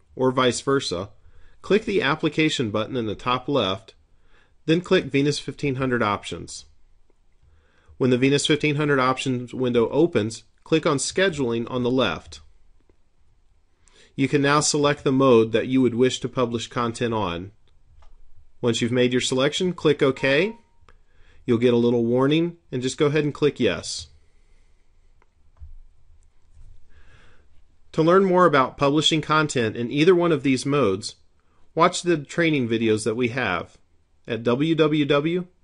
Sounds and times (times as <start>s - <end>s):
Speech: 0.0s - 4.0s, 4.7s - 6.8s, 8.0s - 12.5s, 14.2s - 17.6s, 18.6s - 20.6s, 21.5s - 24.2s, 27.9s - 31.2s, 31.8s - 35.6s.